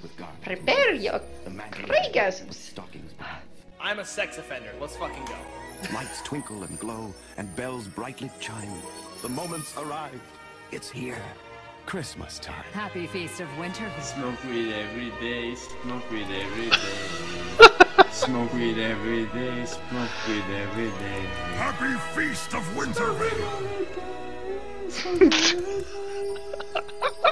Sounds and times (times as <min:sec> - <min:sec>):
Speech: 0:00.0 - 0:10.2, 0:21.6 - 0:23.6
Music: 0:00.0 - 0:27.3.